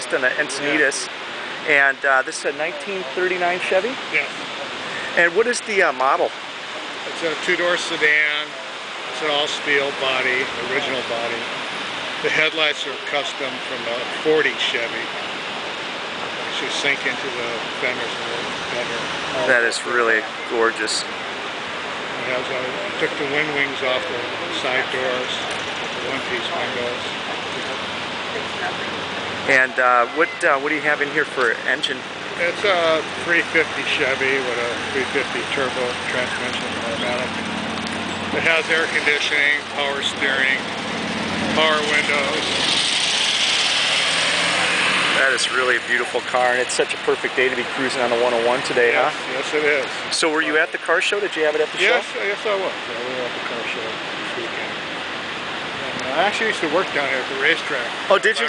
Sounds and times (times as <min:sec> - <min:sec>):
Speech: 0:00.0 - 0:06.3, 0:07.0 - 0:11.5, 0:12.2 - 0:15.1, 0:16.5 - 0:21.1, 0:22.1 - 0:27.8, 0:28.4 - 0:37.3, 0:38.4 - 0:40.7, 0:41.4 - 0:42.6, 0:45.1 - 0:54.7, 0:55.7 - 0:58.4.